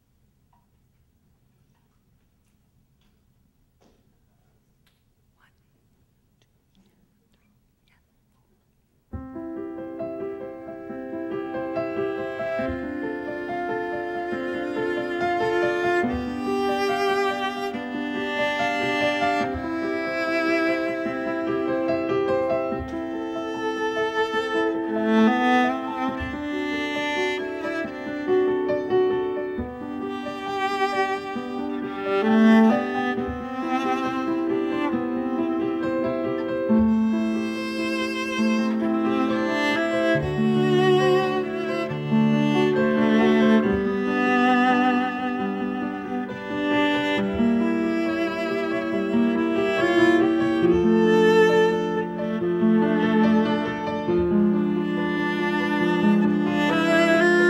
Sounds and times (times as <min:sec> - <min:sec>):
Violin, fiddle: 0:09.8 - 0:57.5.